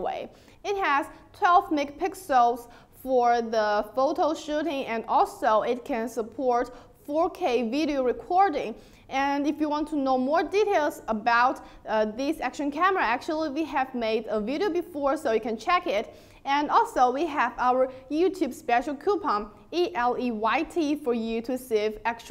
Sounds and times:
Speech: 0:00.0 - 0:22.3.

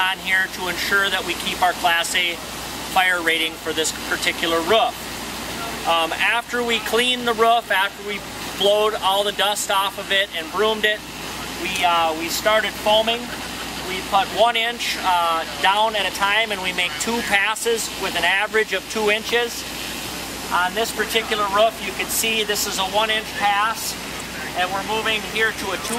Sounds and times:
Speech: 0:00.0 - 0:05.0, 0:05.6 - 0:19.6, 0:20.5 - 0:25.9.

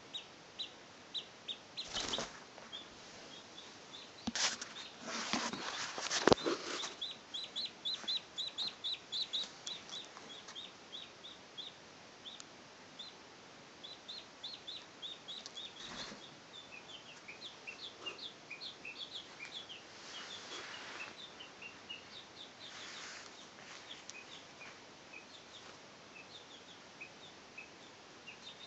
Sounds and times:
Bird: 0:00.0 - 0:12.4, 0:13.8 - 0:28.6.

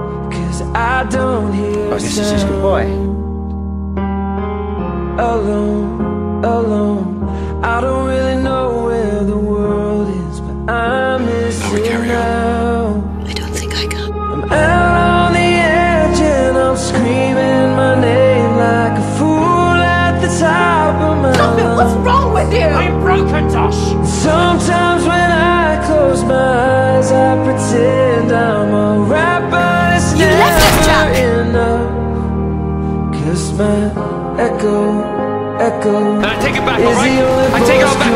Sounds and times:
Music: 0:00.0 - 0:38.1
Speech: 0:01.8 - 0:03.1, 0:11.5 - 0:12.4, 0:21.3 - 0:24.0, 0:29.8 - 0:31.4, 0:36.2 - 0:38.1.

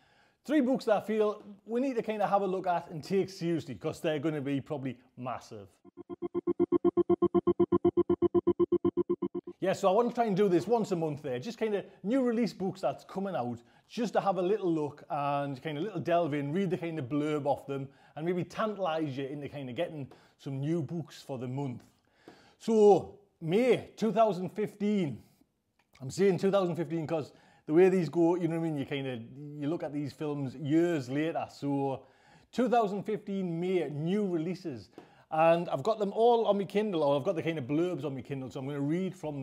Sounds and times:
Speech: 0:00.5 - 0:05.8, 0:09.6 - 0:21.9, 0:22.6 - 0:25.2, 0:26.0 - 0:39.4.

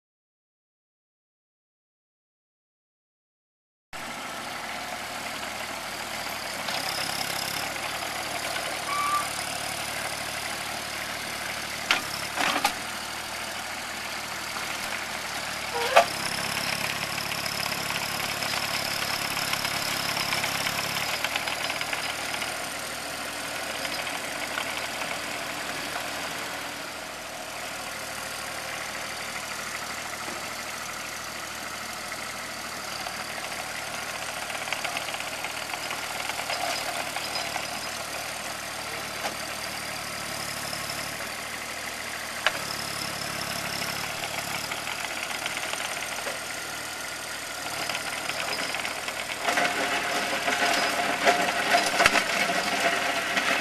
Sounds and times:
Outside, rural or natural: 0:04.0 - 0:53.6
Vehicle: 0:04.0 - 0:53.6.

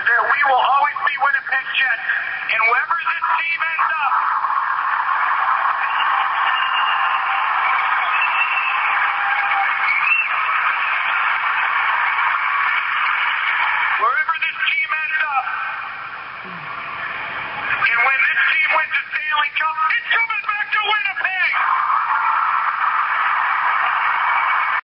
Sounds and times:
Male speech, man speaking: 0:00.0 - 0:04.2, 0:14.0 - 0:15.6, 0:17.8 - 0:21.6.

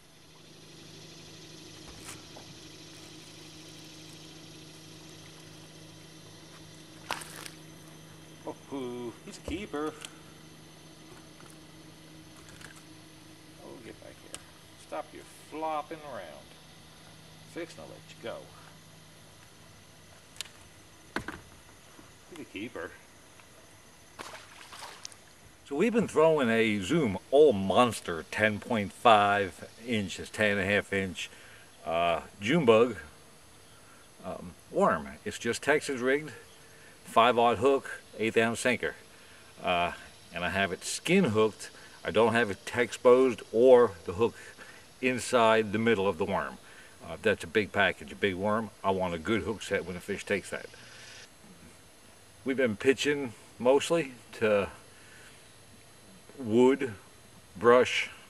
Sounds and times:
Speech: 0:08.5 - 0:10.0, 0:13.6 - 0:16.5, 0:17.5 - 0:18.6, 0:22.3 - 0:23.0, 0:25.7 - 0:33.1, 0:34.2 - 0:36.4, 0:37.1 - 0:39.0, 0:39.6 - 0:44.4, 0:45.0 - 0:50.8, 0:52.4 - 0:54.8, 0:56.4 - 0:57.0, 0:57.6 - 0:58.2.

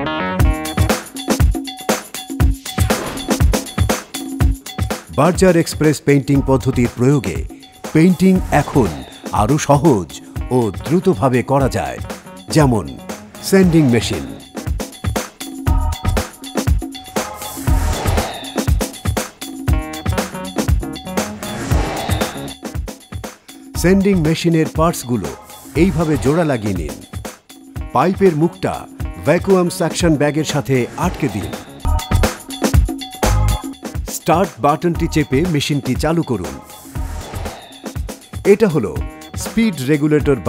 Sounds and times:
Music: 0:00.0 - 0:40.4
Speech: 0:05.1 - 0:14.4, 0:23.8 - 0:27.0, 0:28.0 - 0:31.7, 0:34.1 - 0:36.6, 0:38.5 - 0:40.4.

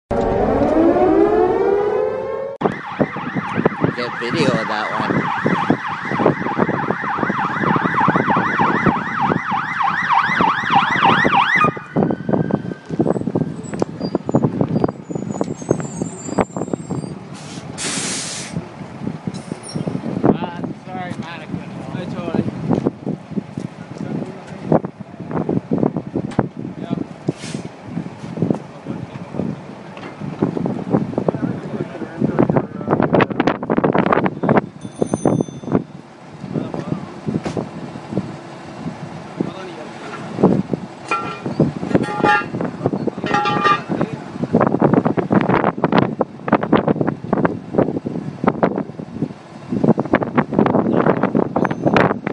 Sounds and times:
Police car (siren): 0:00.1 - 0:13.4
Speech: 0:03.9 - 0:05.2, 0:20.3 - 0:22.5, 0:31.3 - 0:33.0, 0:36.5 - 0:37.2, 0:39.4 - 0:40.3, 0:43.1 - 0:44.4.

